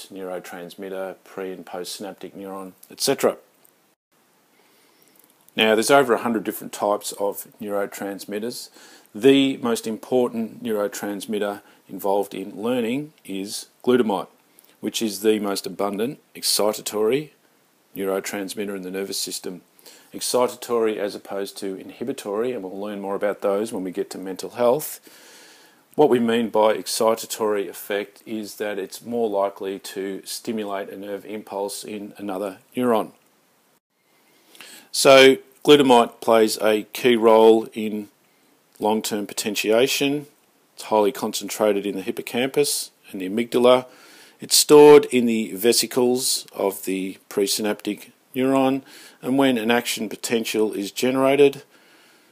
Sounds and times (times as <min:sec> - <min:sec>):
Speech: 0:00.0 - 0:03.5, 0:05.6 - 0:17.4, 0:18.0 - 0:25.0, 0:26.0 - 0:33.2, 0:34.9 - 0:38.1, 0:38.8 - 0:51.7.